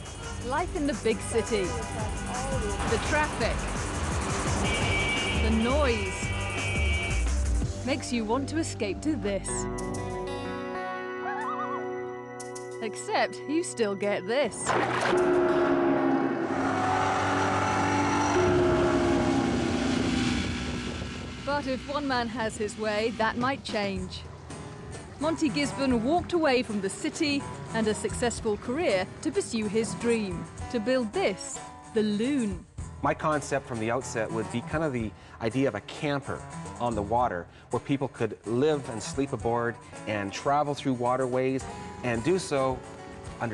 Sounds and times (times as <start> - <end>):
Music: 0.0 - 15.5, 21.4 - 43.5
Speech: 21.5 - 24.2, 25.2 - 42.8.